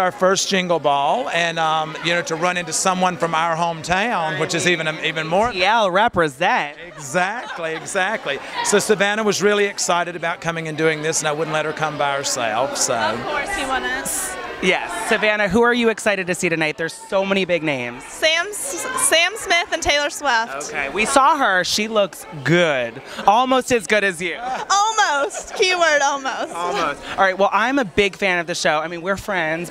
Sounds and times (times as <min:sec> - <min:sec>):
Speech: 0:14.6 - 0:18.0.